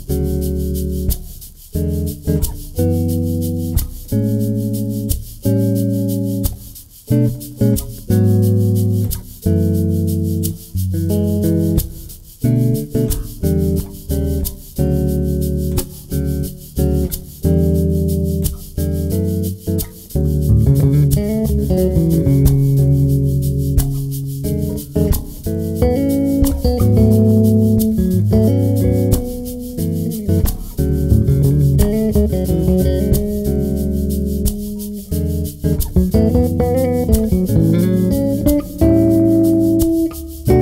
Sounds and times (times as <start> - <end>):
Bass guitar: 0.0 - 40.6.